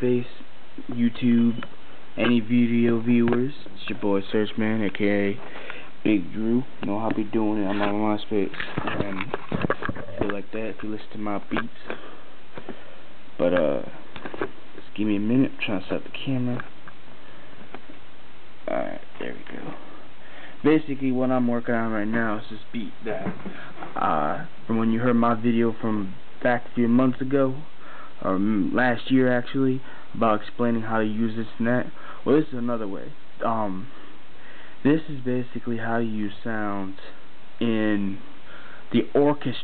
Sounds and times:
Speech: 0.0s - 5.4s, 6.0s - 12.0s, 13.4s - 14.0s, 14.8s - 16.7s, 18.7s - 19.9s, 20.6s - 33.9s, 34.8s - 38.3s, 38.9s - 39.6s.

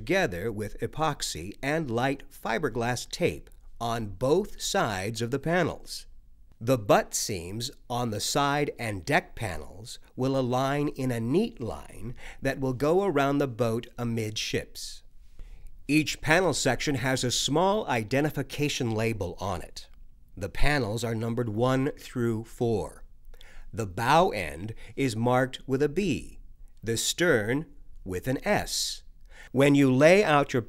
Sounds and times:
Speech: 0.0s - 15.0s, 15.9s - 23.1s, 23.7s - 30.6s.

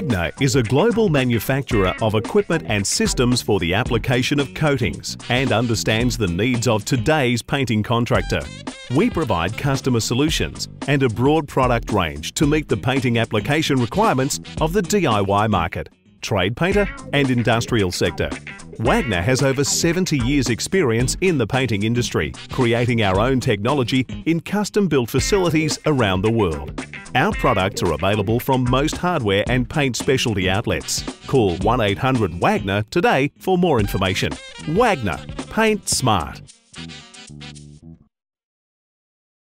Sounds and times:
Speech: 0.0s - 36.5s
Music: 0.0s - 38.1s.

